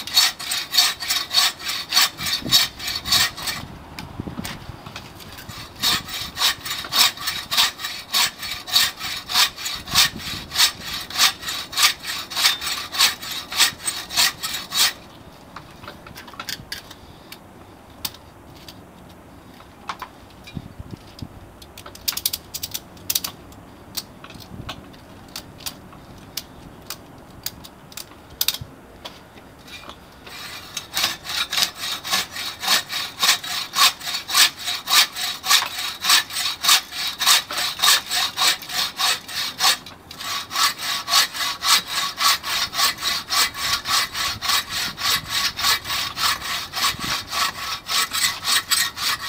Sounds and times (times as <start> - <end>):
Sawing: 0.0 - 3.7, 4.4 - 15.1, 29.7 - 49.2.